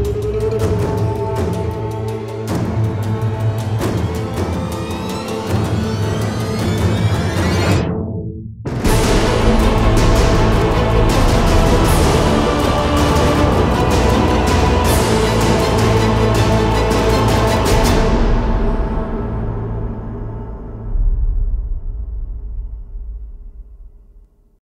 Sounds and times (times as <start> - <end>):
Music: 0.0 - 24.6.